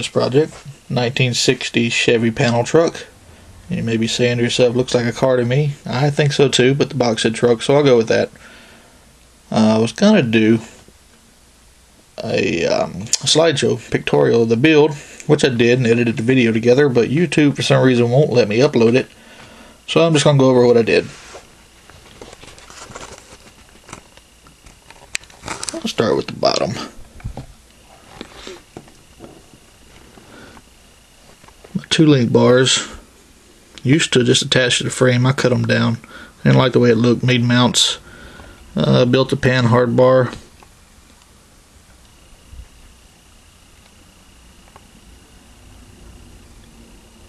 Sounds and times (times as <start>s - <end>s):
Speech: 0.0s - 3.1s, 3.7s - 8.4s, 9.5s - 10.8s, 12.2s - 19.1s, 19.9s - 21.2s, 25.7s - 27.0s, 31.7s - 33.0s, 33.8s - 38.0s, 38.8s - 40.5s.